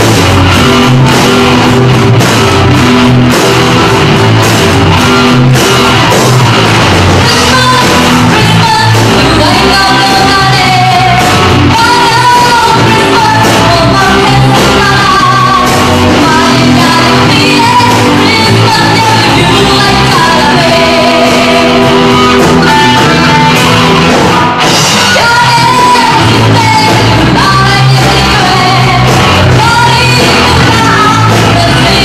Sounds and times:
Musical instrument: 0.0 - 32.0
Singing: 7.2 - 32.0.

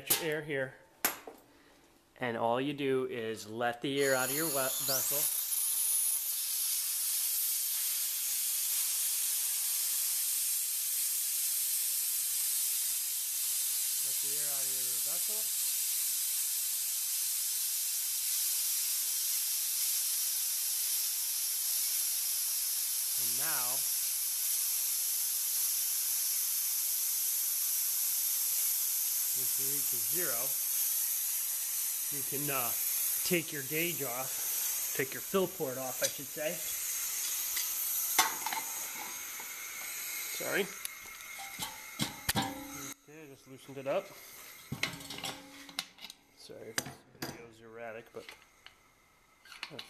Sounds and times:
Speech: 0.0 - 0.8, 2.2 - 5.3, 14.0 - 15.5, 23.2 - 23.9, 29.4 - 30.6, 32.1 - 34.3, 35.0 - 36.7, 40.3 - 40.8, 43.1 - 44.1, 46.4 - 48.3.

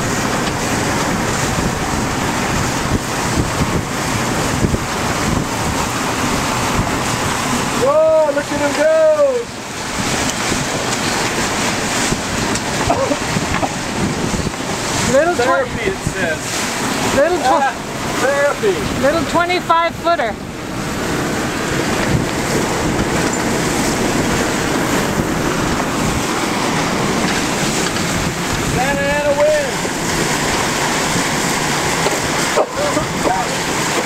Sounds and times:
Sailboat, sailing ship: 0.0 - 34.0
Wind noise (microphone): 0.0 - 34.0.

